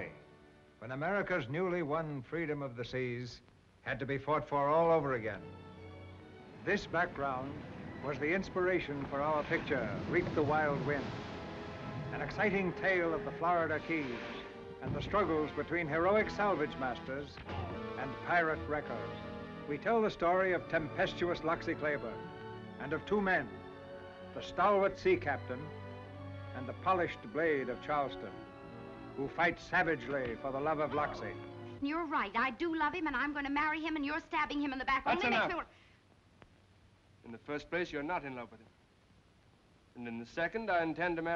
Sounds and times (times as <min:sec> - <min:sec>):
Music: 0:00.0 - 0:35.6, 0:40.0 - 0:41.3
Speech: 0:00.8 - 0:05.4, 0:06.7 - 0:11.1, 0:12.2 - 0:19.1, 0:19.7 - 0:22.2, 0:24.4 - 0:25.7, 0:26.6 - 0:28.3, 0:29.2 - 0:35.7, 0:37.2 - 0:38.7, 0:40.0 - 0:41.3.